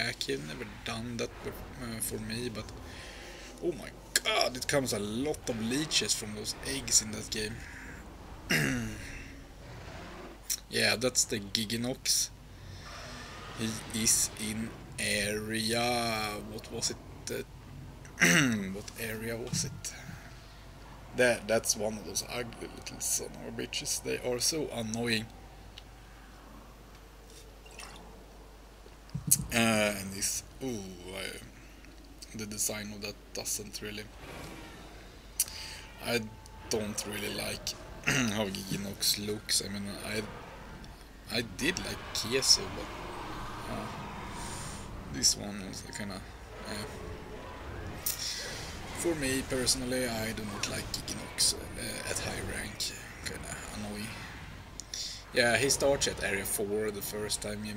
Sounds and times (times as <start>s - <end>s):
Speech: 0.0s - 2.8s, 3.6s - 7.7s, 10.5s - 12.3s, 13.6s - 17.4s, 18.2s - 20.1s, 21.2s - 25.3s, 29.3s - 31.5s, 32.2s - 34.1s, 35.4s - 40.3s, 41.3s - 42.9s, 43.6s - 44.0s, 45.1s - 47.0s, 48.1s - 54.2s, 55.0s - 57.7s.